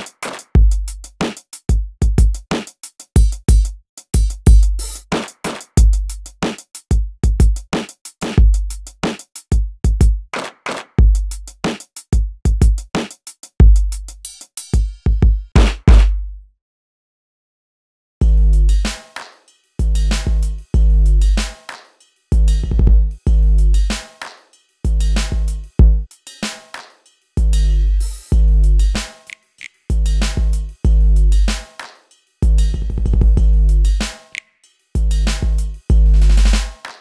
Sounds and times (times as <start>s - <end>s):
Drum machine: 0.0s - 16.3s, 18.2s - 37.0s
Bass drum: 0.6s - 2.5s, 3.2s - 5.1s, 5.8s - 7.7s, 8.4s - 10.3s, 11.0s - 11.6s, 12.2s - 13.0s, 13.6s - 14.2s, 14.8s - 16.4s, 18.2s - 19.0s, 19.8s - 21.6s, 22.3s - 24.0s, 24.9s - 26.1s, 27.4s - 29.1s, 29.9s - 31.7s, 32.4s - 34.2s, 35.0s - 36.8s.